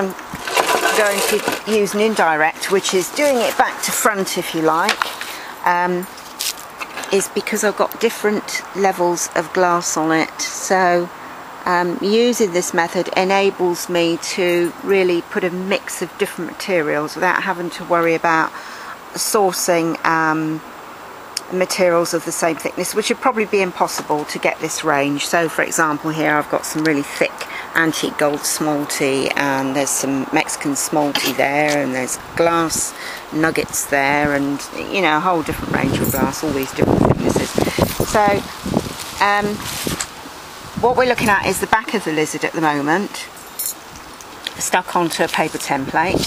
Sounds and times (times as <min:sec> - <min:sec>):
Speech: 0:00.0 - 0:06.2, 0:07.0 - 0:20.7, 0:21.4 - 0:38.5, 0:39.2 - 0:39.7, 0:40.8 - 0:43.3, 0:44.5 - 0:46.2.